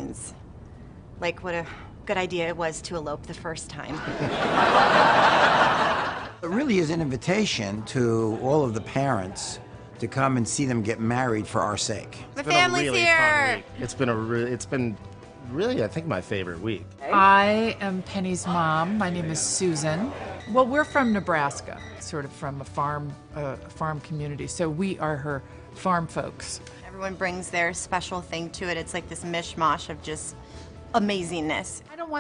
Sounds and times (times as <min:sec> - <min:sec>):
Music: 0:01.2 - 0:32.2
Speech: 0:12.4 - 0:13.2.